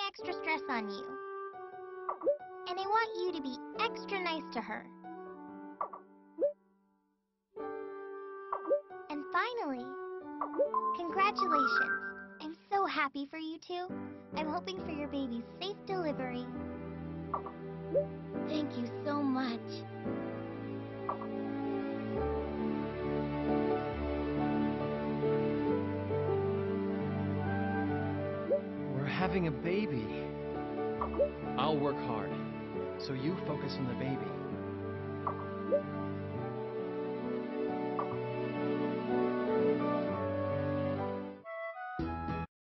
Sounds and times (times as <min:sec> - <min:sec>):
Child speech, kid speaking: 0:00.0 - 0:01.2, 0:02.7 - 0:05.0, 0:09.1 - 0:10.0, 0:11.0 - 0:16.6, 0:18.5 - 0:19.9.